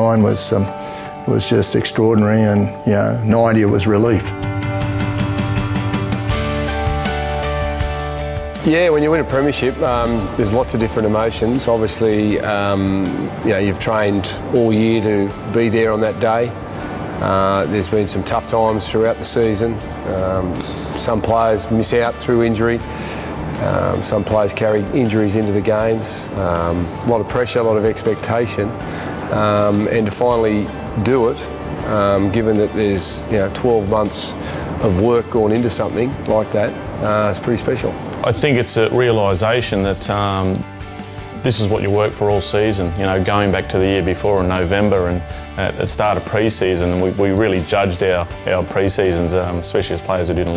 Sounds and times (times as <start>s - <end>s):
Speech: 0.0s - 0.7s, 1.3s - 4.4s, 8.6s - 16.5s, 17.2s - 22.8s, 23.6s - 28.7s, 29.3s - 40.7s, 41.4s - 50.5s
Music: 0.0s - 50.5s.